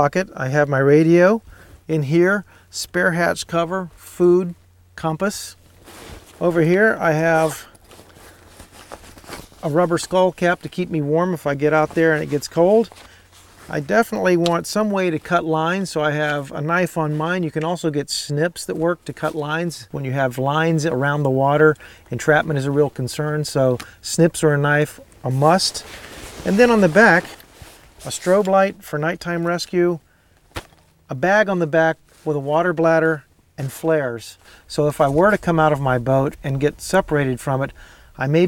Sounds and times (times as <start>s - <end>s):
Speech: 0.0s - 5.6s, 6.4s - 7.7s, 9.6s - 12.9s, 13.7s - 27.4s, 28.0s - 30.0s, 31.1s - 38.4s.